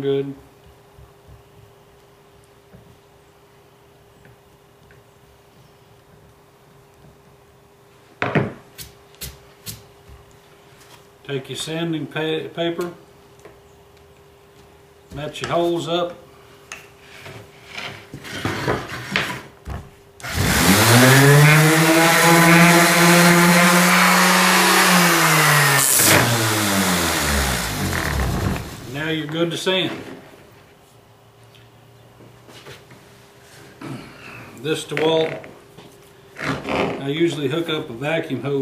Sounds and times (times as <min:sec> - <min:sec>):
Speech: 0:00.0 - 0:00.4, 0:11.2 - 0:13.0, 0:15.1 - 0:16.2, 0:28.9 - 0:30.1, 0:34.6 - 0:35.4, 0:36.9 - 0:38.6.